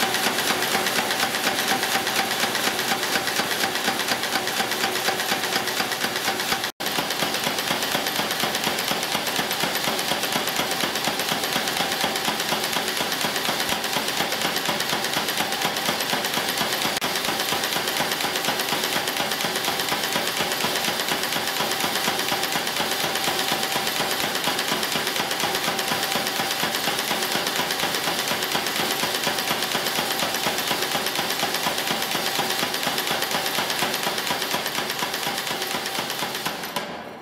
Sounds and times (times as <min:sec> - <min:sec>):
Inside, large room or hall: 0:00.0 - 0:37.2.